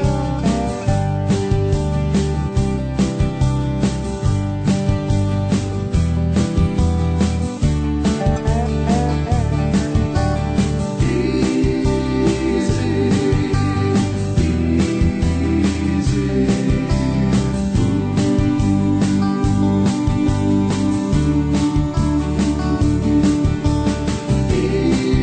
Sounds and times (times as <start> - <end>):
Music: 0.0 - 25.2.